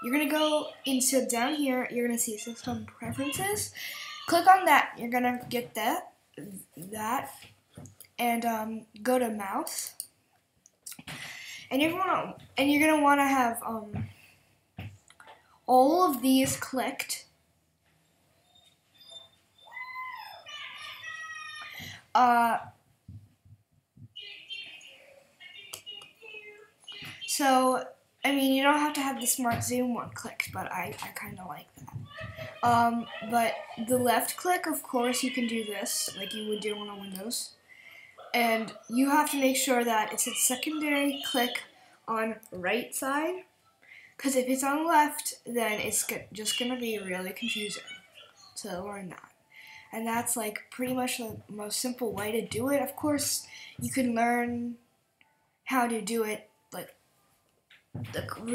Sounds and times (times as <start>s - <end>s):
Speech: 0.0s - 7.4s, 8.2s - 10.0s, 11.6s - 14.1s, 15.7s - 17.3s, 20.5s - 22.8s, 25.4s - 37.6s, 38.2s - 43.4s, 44.2s - 49.3s, 49.9s - 54.8s, 55.7s - 56.9s, 58.0s - 58.5s.